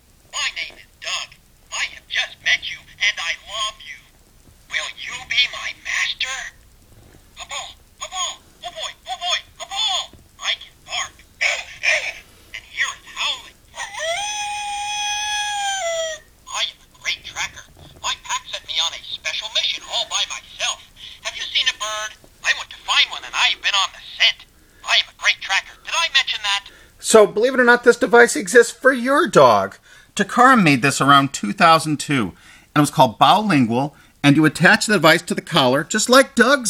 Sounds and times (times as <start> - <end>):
Inside, small room: 0.0 - 36.6
Speech: 0.4 - 4.1, 4.7 - 6.6, 7.4 - 13.9, 16.5 - 36.6.